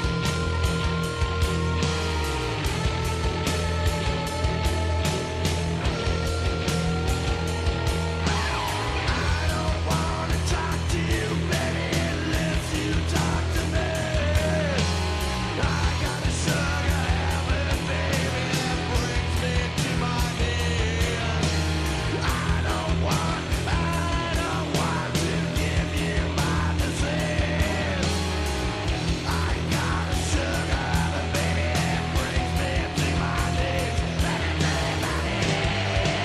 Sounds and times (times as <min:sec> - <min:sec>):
Music: 0:00.0 - 0:36.2.